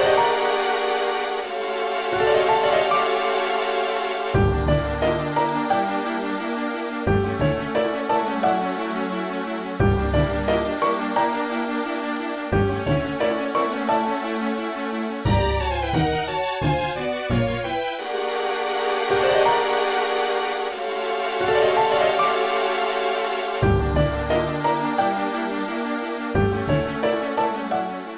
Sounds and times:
Theme music: 0.0 - 9.2, 9.8 - 14.1, 15.2 - 28.1
Video game music: 0.0 - 28.1.

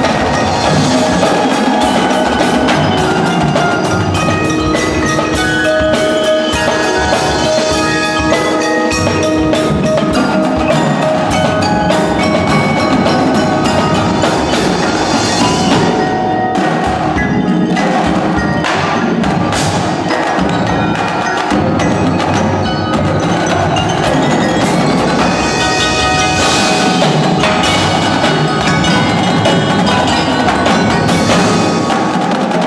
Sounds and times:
Drum kit: 0.0 - 32.6
Drum roll: 0.0 - 32.6
Glockenspiel: 0.0 - 32.6
Marimba, xylophone: 0.0 - 32.6.

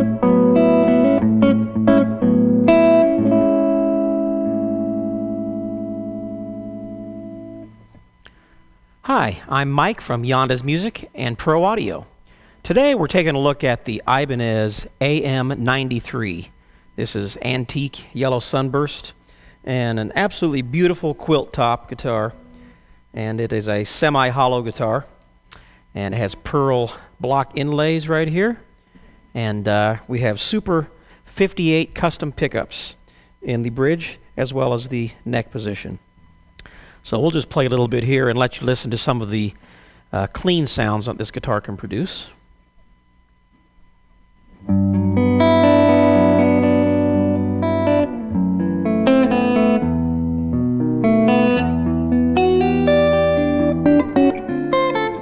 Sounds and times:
Speech: 9.1 - 22.4, 23.2 - 25.2, 26.0 - 28.7, 29.4 - 36.0, 37.0 - 42.4.

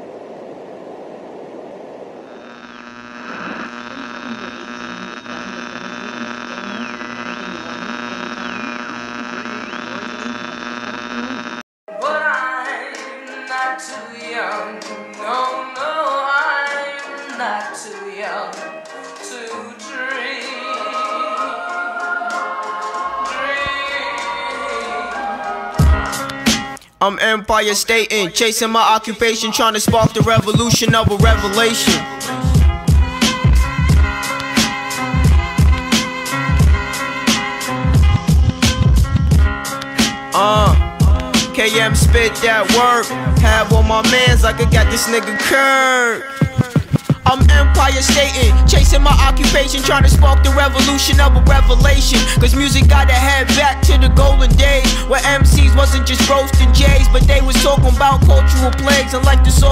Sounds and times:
Music: 11.9 - 26.8, 29.7 - 59.7.

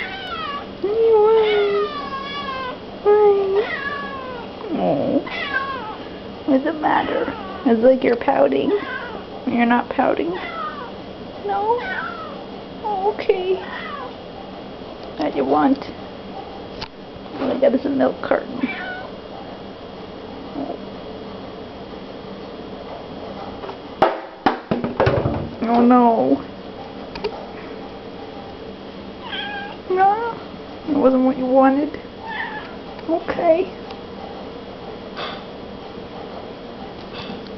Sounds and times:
Speech: 3.0 - 3.7, 4.6 - 5.3, 6.5 - 8.8, 9.4 - 10.4, 12.8 - 13.6, 15.2 - 16.0, 17.4 - 18.7, 25.6 - 26.5, 29.9 - 32.0, 33.0 - 33.8.

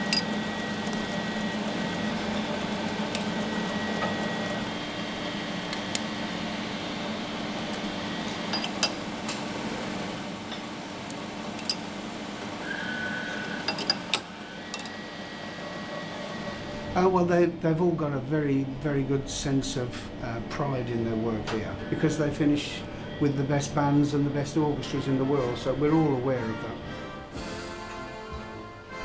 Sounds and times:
Speech: 17.0 - 26.8.

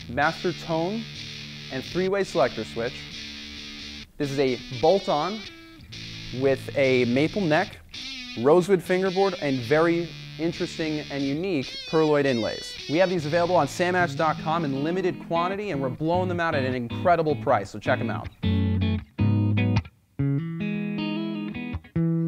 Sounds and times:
Electric guitar: 0.0 - 22.2
Speech: 0.1 - 1.1, 1.7 - 3.0, 4.2 - 5.5, 6.4 - 7.8, 8.4 - 18.3.

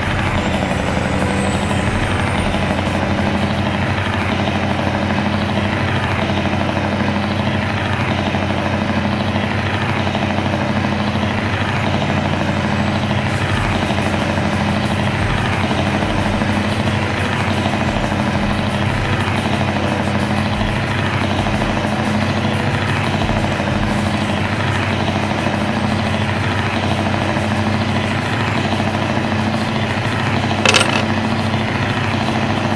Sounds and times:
Music: 0.0 - 10.1, 11.2 - 32.7
Truck: 0.0 - 32.7.

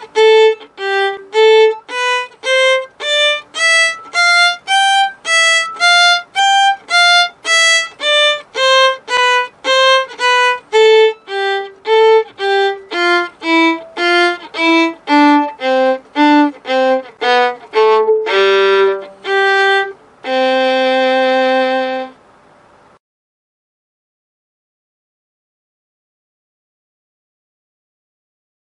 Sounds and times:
Violin, fiddle: 0.0 - 22.2.

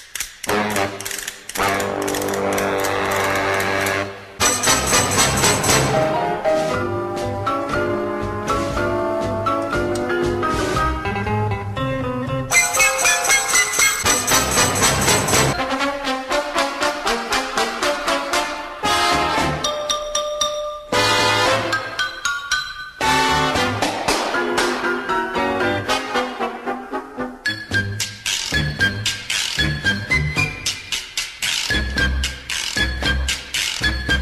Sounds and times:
Music: 0.0 - 34.2.

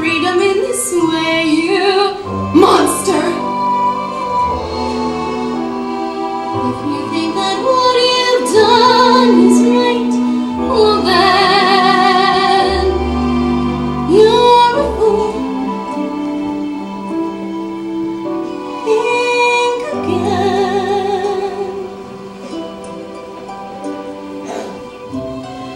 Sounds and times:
Female singing: 0.0 - 3.5, 6.6 - 13.0, 14.1 - 15.8, 18.8 - 21.9
Music: 0.0 - 25.7.

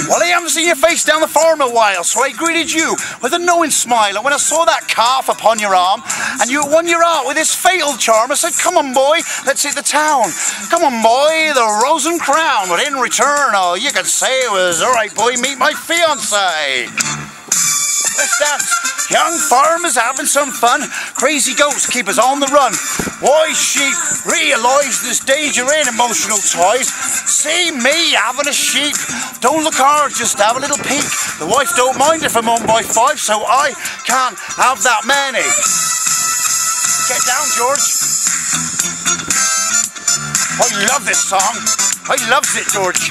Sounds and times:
Speech: 0.0 - 16.9, 18.2 - 35.7, 37.0 - 38.0, 40.6 - 43.1
Music: 0.0 - 43.1.

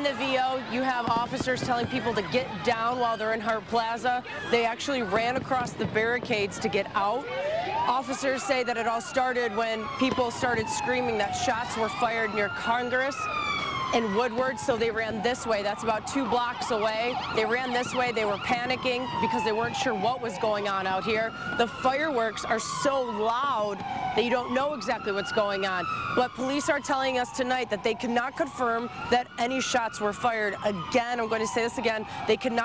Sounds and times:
Police car (siren): 0.0 - 32.6.

